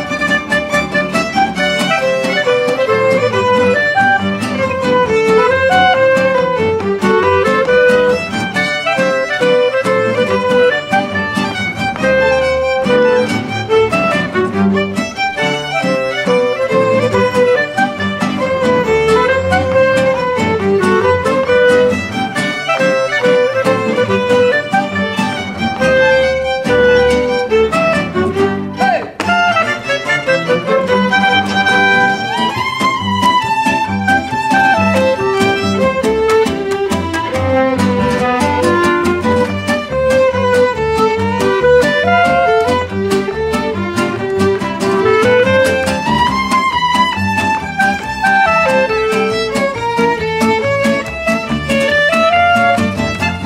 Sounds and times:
Orchestra: 0:00.0 - 0:53.4.

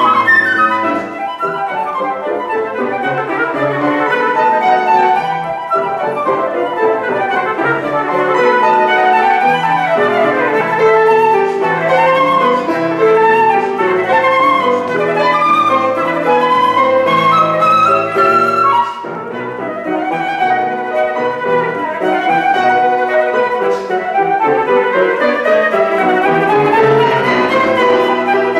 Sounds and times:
Violin, fiddle: 0:00.0 - 0:28.5.

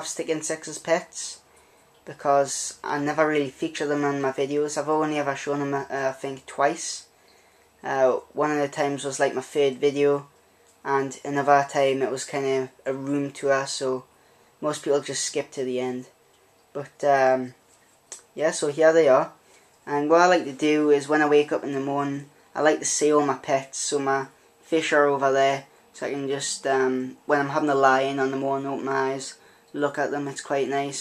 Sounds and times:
Speech: 0:00.0 - 0:01.4, 0:02.1 - 0:07.1, 0:07.8 - 0:16.2, 0:16.8 - 0:31.0.

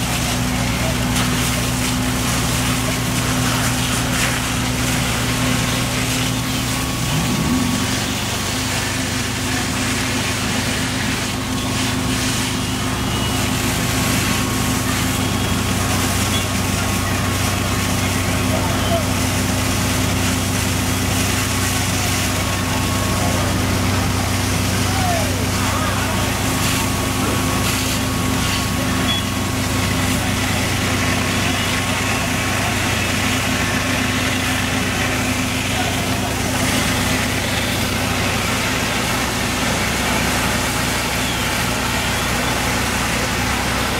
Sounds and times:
Speech: 0:00.0 - 0:06.5, 0:08.4 - 0:43.9
Medium engine (mid frequency): 0:00.0 - 0:43.9
Outside, urban or manmade: 0:00.0 - 0:43.9.

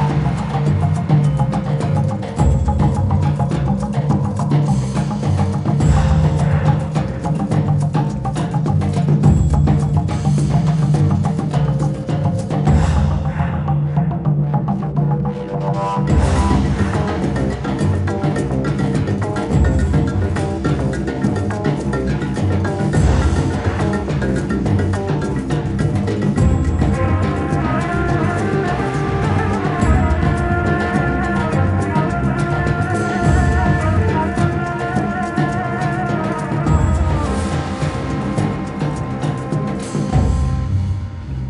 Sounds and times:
Music: 0:00.0 - 0:41.5.

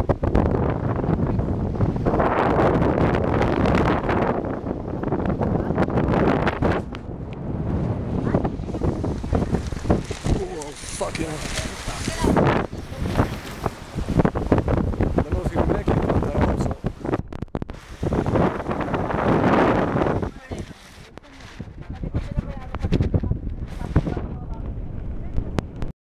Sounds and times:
Boat, Water vehicle: 0:00.0 - 0:25.9
Speech: 0:20.3 - 0:25.8.

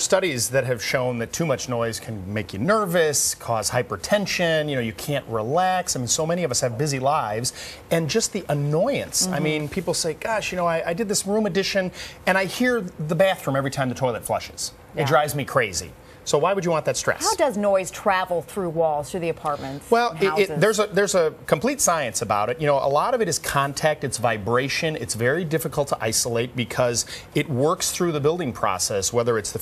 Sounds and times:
Speech: 0:00.0 - 0:17.6, 0:19.3 - 0:29.6.

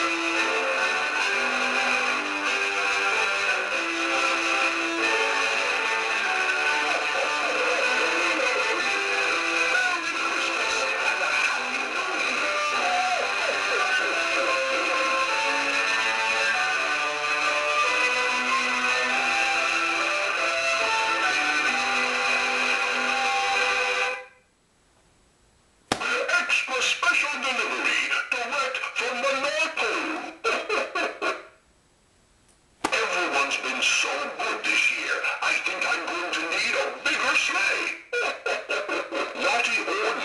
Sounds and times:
Speech: 0:09.7 - 0:14.6, 0:26.0 - 0:31.5, 0:32.9 - 0:40.2.

